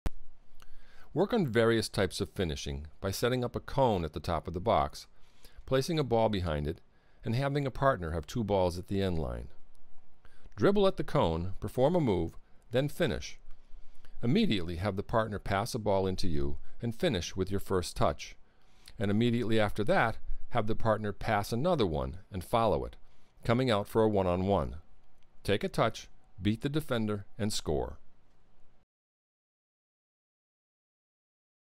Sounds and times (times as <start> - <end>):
Speech: 1.2 - 5.1, 5.7 - 9.6, 10.6 - 13.4, 14.2 - 18.4, 19.0 - 24.8, 25.4 - 28.0.